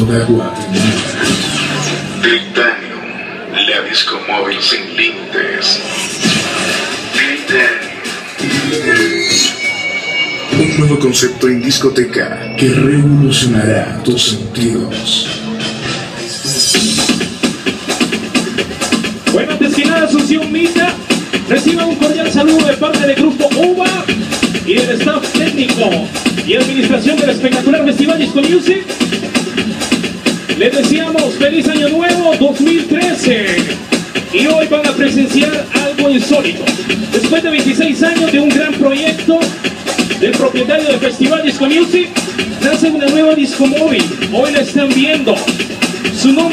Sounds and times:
Music: 0.0 - 46.5
Speech: 2.2 - 5.9, 7.2 - 9.2, 10.5 - 15.6, 19.3 - 24.1, 24.7 - 28.9, 30.6 - 45.5, 46.1 - 46.5.

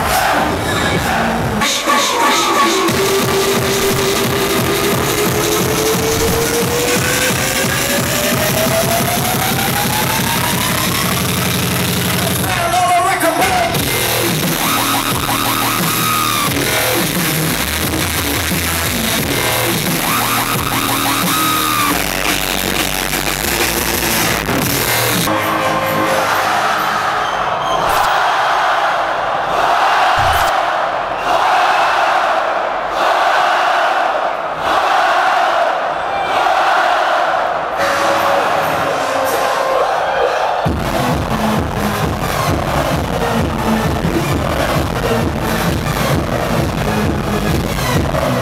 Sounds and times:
Techno: 0.0 - 25.4, 30.2 - 30.6, 40.6 - 48.4.

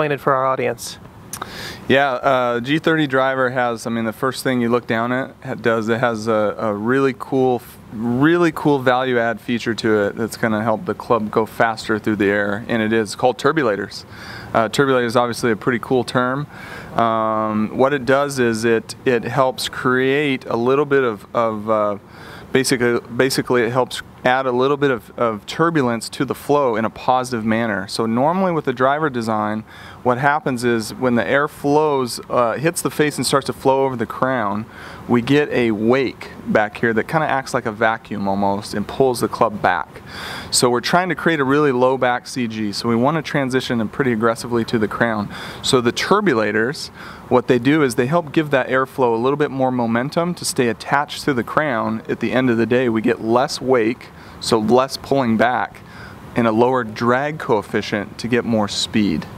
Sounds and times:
Speech: 0.0 - 59.3.

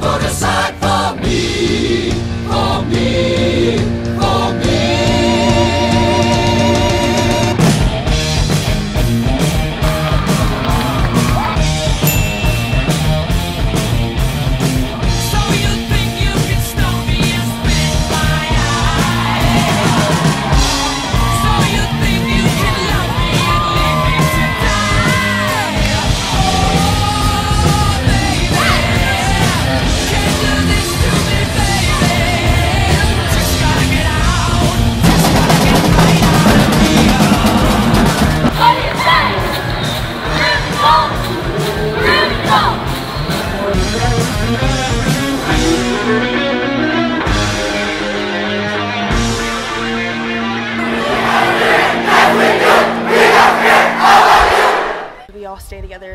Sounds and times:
Music: 0.0 - 56.1
Inside, large room or hall: 6.2 - 55.4.

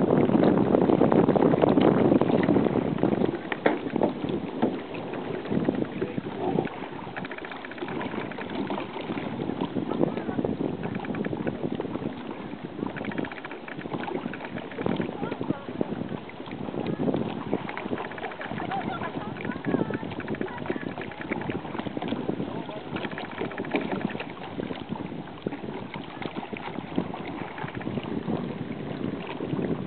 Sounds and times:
Rowboat, canoe, kayak: 0.0 - 29.8
Speech: 6.0 - 6.7, 9.9 - 10.4, 15.2 - 15.8, 18.5 - 21.2, 22.5 - 23.0.

